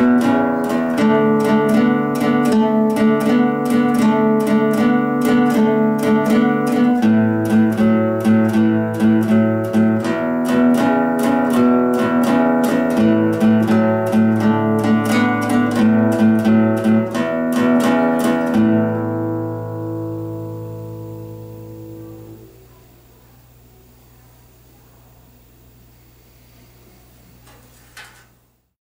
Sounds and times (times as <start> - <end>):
Acoustic guitar: 0.0 - 23.4.